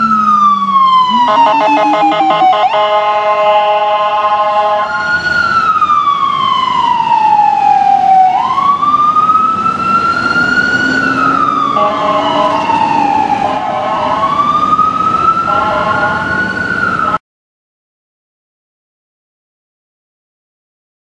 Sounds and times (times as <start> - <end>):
Ambulance (siren): 0.0 - 17.2.